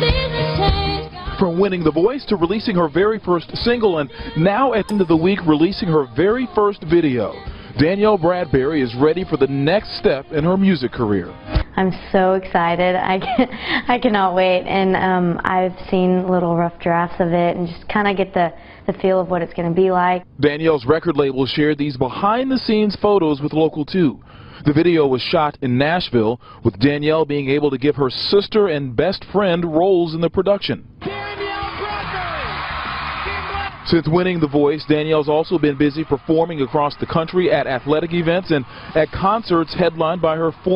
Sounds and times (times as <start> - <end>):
Music: 0.0 - 11.9, 31.0 - 40.6.